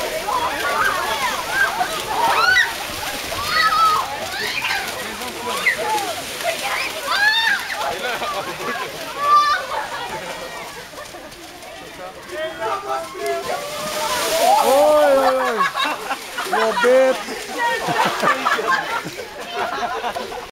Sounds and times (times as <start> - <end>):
Outside, rural or natural: 0.0 - 20.5.